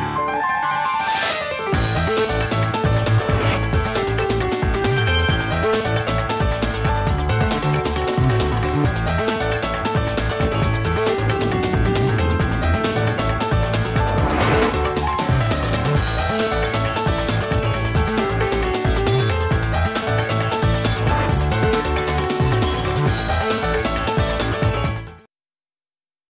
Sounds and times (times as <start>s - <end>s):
Music: 0.0s - 25.3s.